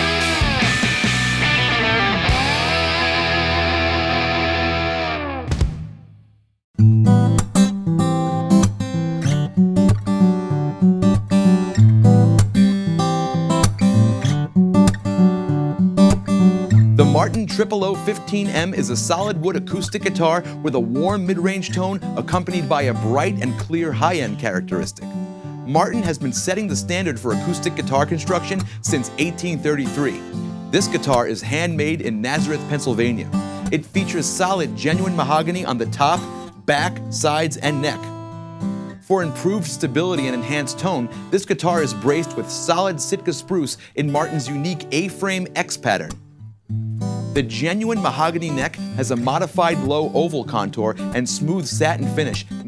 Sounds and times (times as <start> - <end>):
Acoustic guitar: 0.0 - 5.5, 6.8 - 52.6
Speech: 17.0 - 25.0, 25.7 - 38.1, 39.0 - 46.2, 47.4 - 52.6.